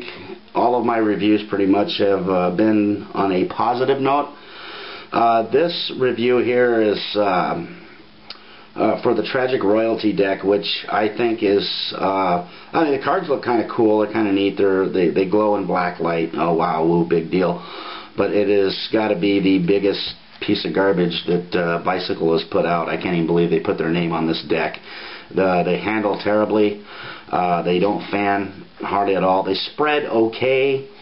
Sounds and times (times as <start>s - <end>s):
Speech: 0.0s - 4.4s, 5.1s - 7.8s, 8.8s - 17.6s, 18.2s - 30.9s.